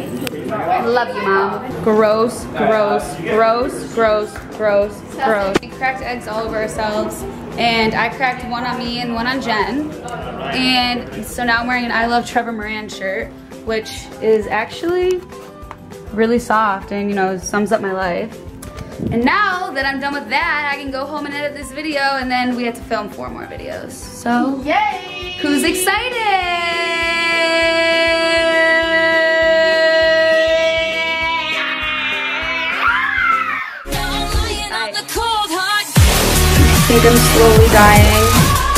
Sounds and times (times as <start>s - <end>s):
Music: 0.0s - 38.7s.